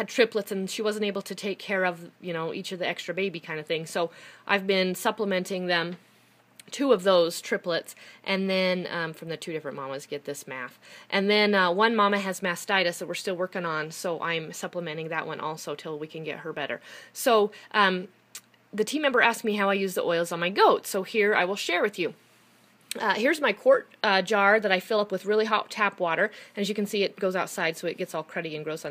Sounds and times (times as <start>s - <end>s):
Speech: 0.0s - 6.0s, 6.6s - 18.1s, 18.8s - 22.2s, 22.9s - 28.9s.